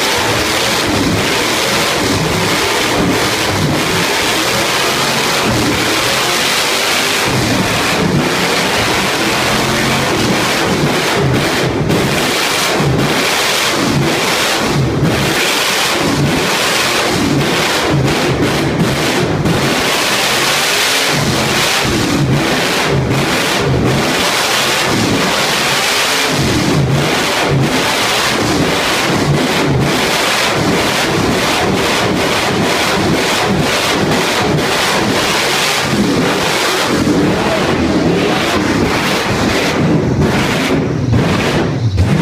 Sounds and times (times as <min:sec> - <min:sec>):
Vehicle: 0:00.0 - 0:42.2.